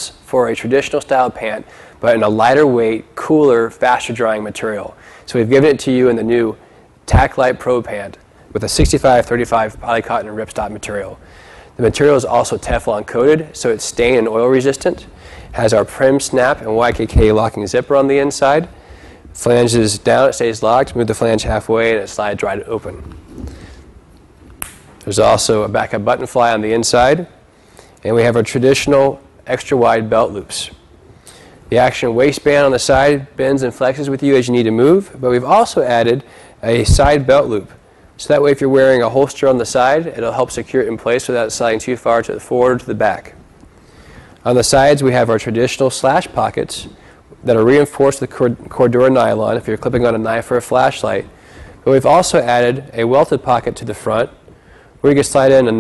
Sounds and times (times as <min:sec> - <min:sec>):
Speech: 0:00.0 - 0:11.2, 0:11.8 - 0:18.8, 0:19.4 - 0:23.1, 0:25.0 - 0:27.4, 0:28.0 - 0:30.8, 0:31.7 - 0:43.4, 0:44.4 - 0:54.4, 0:55.0 - 0:55.8.